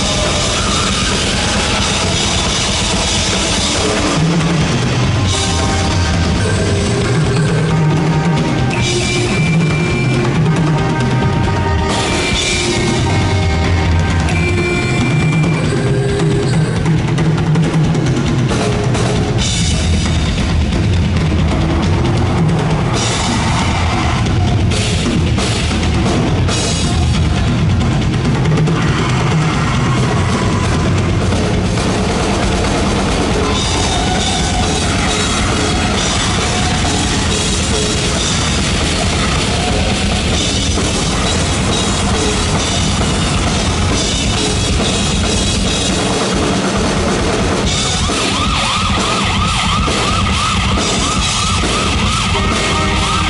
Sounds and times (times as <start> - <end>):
Drum: 0.0 - 53.3
Drum kit: 0.0 - 53.3.